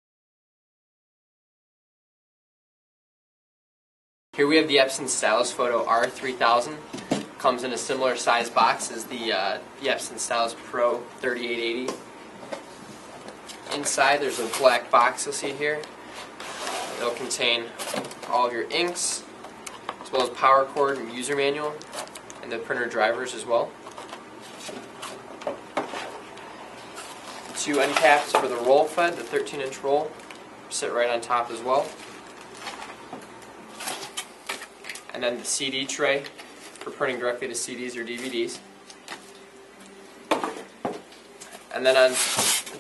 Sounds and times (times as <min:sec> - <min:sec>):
Speech: 0:04.4 - 0:12.0, 0:13.7 - 0:15.9, 0:16.9 - 0:19.3, 0:20.0 - 0:21.8, 0:22.4 - 0:23.8, 0:27.6 - 0:32.0, 0:35.1 - 0:38.6, 0:41.7 - 0:42.3.